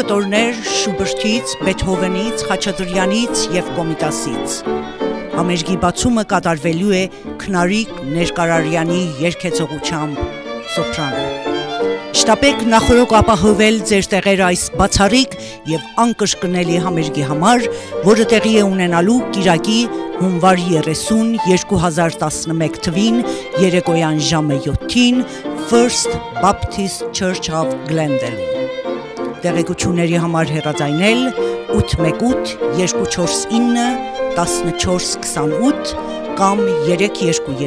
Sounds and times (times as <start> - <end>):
Violin, fiddle: 0.0 - 37.6.